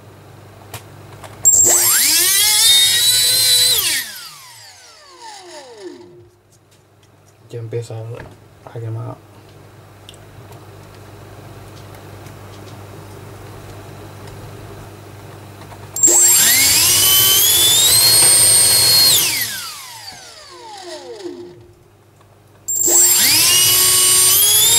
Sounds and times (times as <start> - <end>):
Mechanical fan: 0.0 - 24.7.